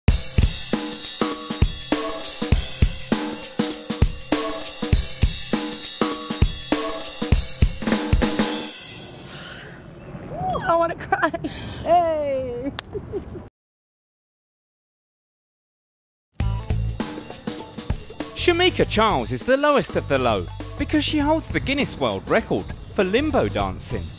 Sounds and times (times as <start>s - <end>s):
Drum kit: 0.1s - 9.3s, 16.4s - 24.1s.